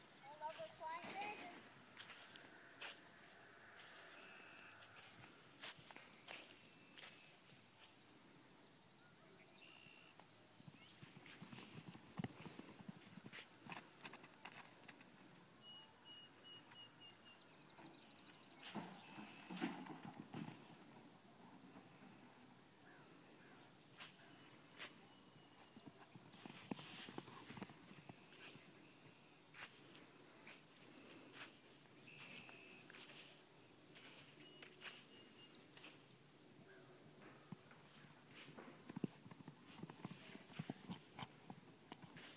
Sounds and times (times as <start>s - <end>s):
Outside, rural or natural: 0.0s - 42.3s.